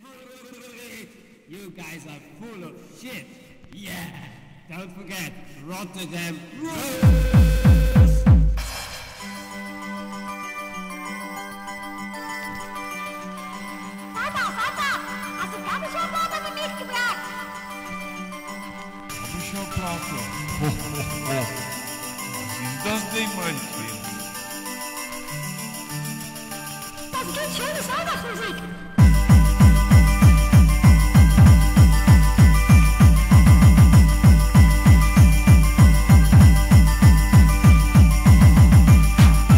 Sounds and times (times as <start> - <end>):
Techno: 6.7 - 9.3, 19.1 - 24.9, 25.6 - 39.5.